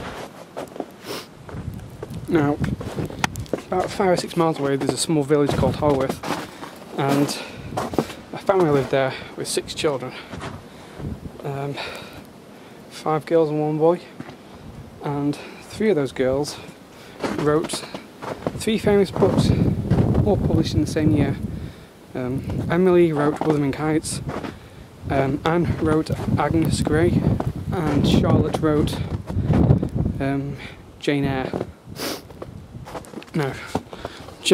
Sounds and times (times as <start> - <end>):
Speech: 2.3 - 2.7, 3.7 - 6.2, 7.0 - 7.6, 8.3 - 10.3, 11.4 - 12.0, 12.9 - 14.2, 15.0 - 16.7, 17.3 - 18.0, 18.6 - 21.5, 22.1 - 24.3, 25.1 - 29.2, 30.2 - 31.7, 33.3 - 33.8.